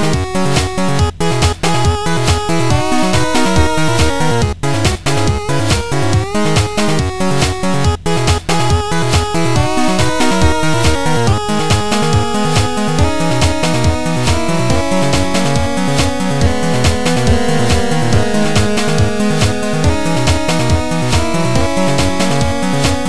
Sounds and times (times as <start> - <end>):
Soundtrack music: 0.0 - 23.0.